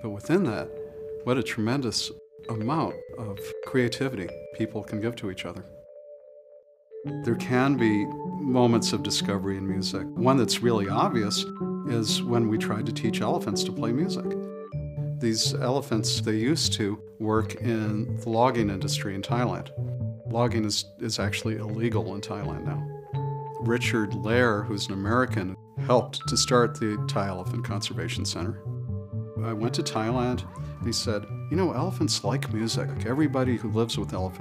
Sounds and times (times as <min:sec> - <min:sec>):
Speech: 0:00.0 - 0:00.7, 0:01.3 - 0:05.7, 0:07.2 - 0:14.4, 0:15.2 - 0:19.7, 0:20.3 - 0:22.8, 0:23.6 - 0:28.6, 0:29.4 - 0:34.4
Music: 0:00.0 - 0:34.4.